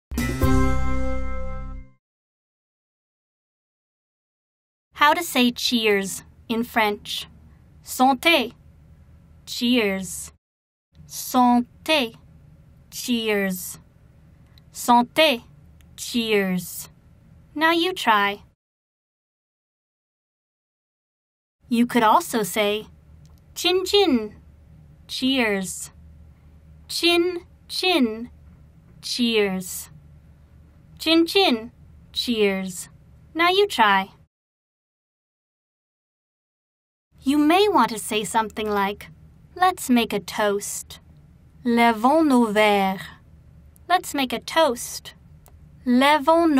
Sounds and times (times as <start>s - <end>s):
Speech: 5.0s - 8.6s, 9.5s - 10.4s, 11.1s - 12.2s, 12.9s - 13.9s, 14.7s - 16.9s, 17.5s - 18.6s, 21.7s - 22.9s, 23.6s - 24.4s, 25.1s - 26.0s, 26.9s - 28.4s, 29.0s - 30.0s, 31.0s - 34.2s, 37.2s - 41.0s, 41.6s - 43.2s, 43.9s - 45.2s, 45.8s - 46.5s.